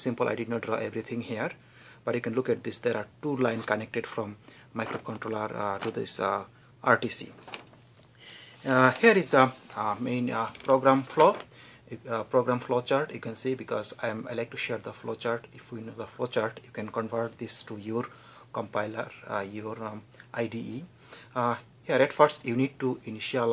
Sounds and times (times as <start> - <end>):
Speech: 0.0 - 7.4, 8.6 - 23.5.